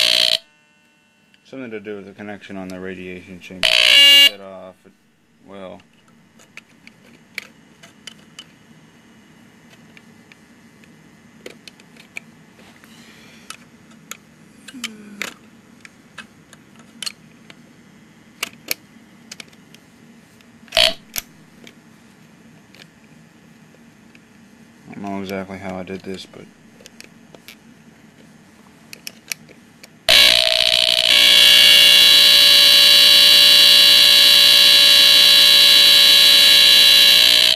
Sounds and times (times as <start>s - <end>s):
Speech: 1.4s - 3.6s, 4.3s - 5.9s, 24.8s - 26.5s
Smoke detector, smoke alarm: 3.7s - 4.4s, 30.1s - 37.5s.